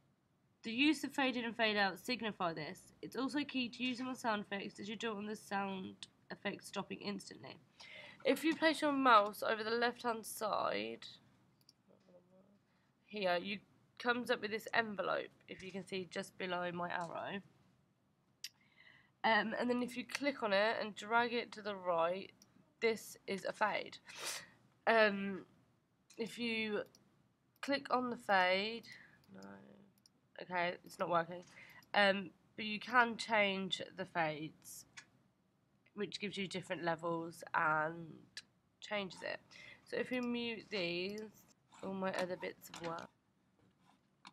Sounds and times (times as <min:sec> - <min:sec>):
Speech: 0:00.7 - 0:11.2, 0:13.1 - 0:17.4, 0:19.2 - 0:25.4, 0:26.2 - 0:26.9, 0:27.6 - 0:29.8, 0:30.4 - 0:34.9, 0:36.0 - 0:43.1.